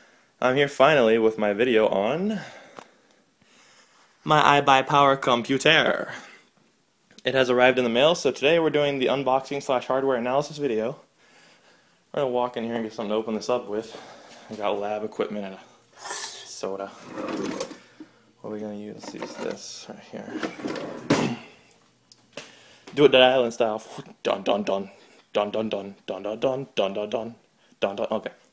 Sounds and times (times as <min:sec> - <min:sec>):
Inside, small room: 0:00.0 - 0:28.5
Speech: 0:00.4 - 0:02.6, 0:04.2 - 0:06.3, 0:07.2 - 0:11.1, 0:12.1 - 0:17.6, 0:18.4 - 0:20.5, 0:23.0 - 0:28.5.